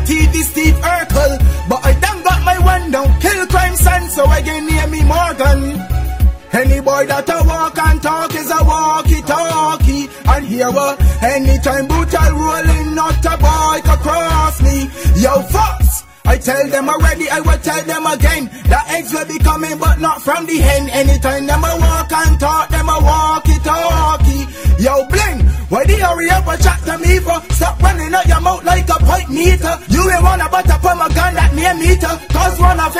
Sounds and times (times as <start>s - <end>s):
Music: 0.0s - 32.9s.